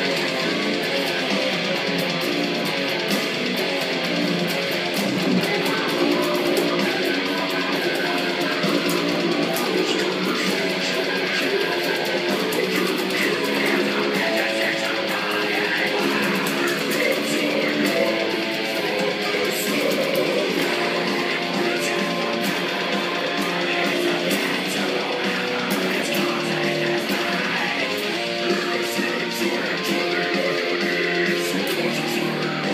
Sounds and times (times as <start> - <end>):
Guitar: 0.0 - 32.7.